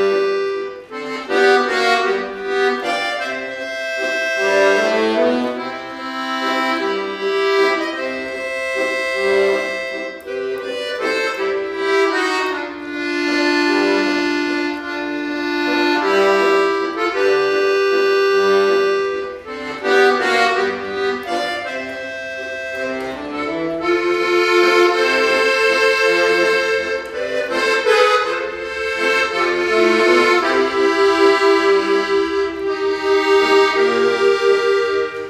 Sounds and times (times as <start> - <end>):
Accordion: 0.0 - 35.3.